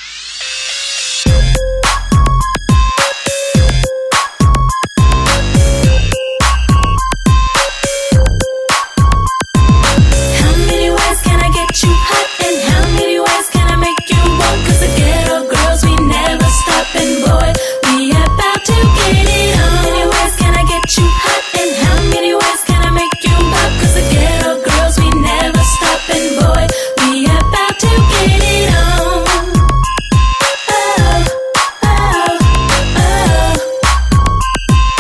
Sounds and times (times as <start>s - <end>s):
Pop music: 1.2s - 35.0s.